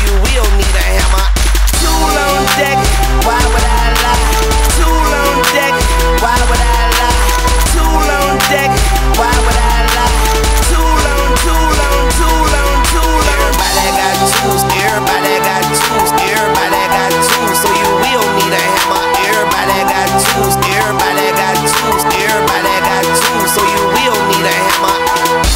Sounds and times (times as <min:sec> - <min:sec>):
Music: 0:00.0 - 0:25.5.